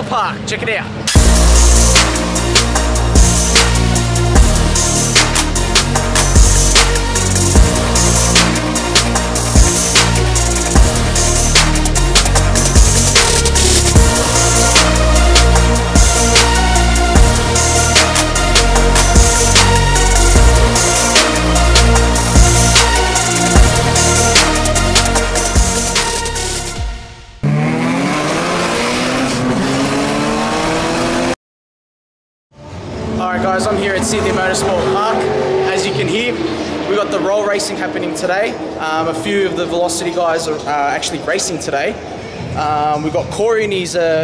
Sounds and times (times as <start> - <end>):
Music: 1.1 - 27.4.